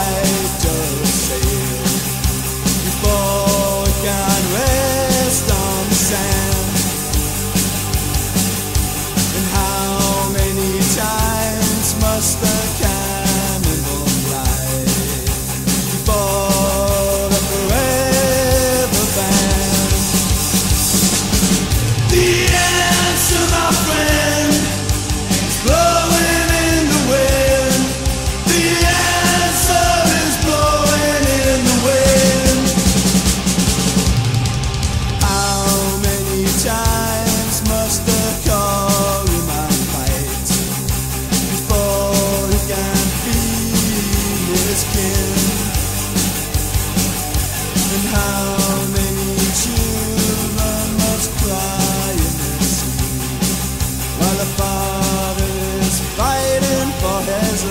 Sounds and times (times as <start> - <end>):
Music: 0.0 - 57.7.